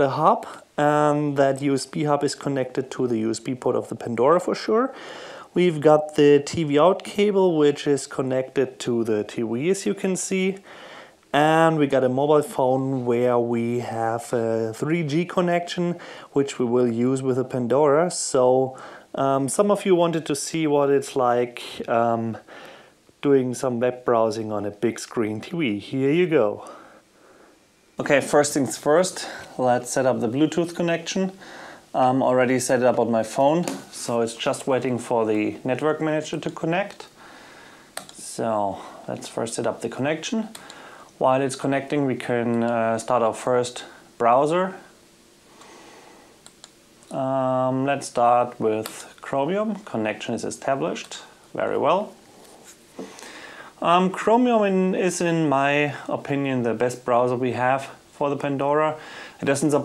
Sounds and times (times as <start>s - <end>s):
Speech: 0.0s - 10.7s, 11.3s - 22.5s, 23.2s - 26.8s, 28.0s - 37.2s, 38.1s - 40.6s, 41.2s - 44.9s, 47.1s - 52.2s, 53.8s - 59.8s.